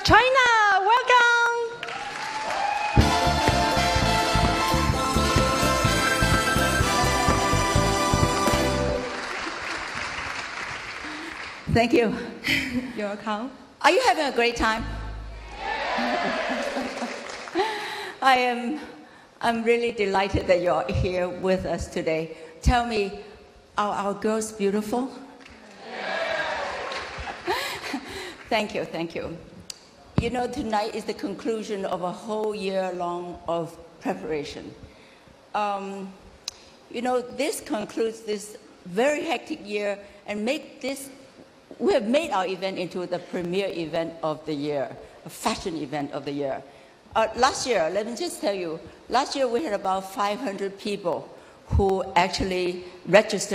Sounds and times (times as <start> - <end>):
Female speech, woman speaking: 0.0 - 1.8, 11.7 - 12.3, 13.0 - 15.0, 18.2 - 23.2, 23.8 - 25.2, 28.5 - 29.5, 30.2 - 34.8, 35.6 - 36.2, 36.9 - 41.2, 41.8 - 46.6, 47.2 - 53.5
Narration, monologue: 17.6 - 25.6, 27.5 - 53.5.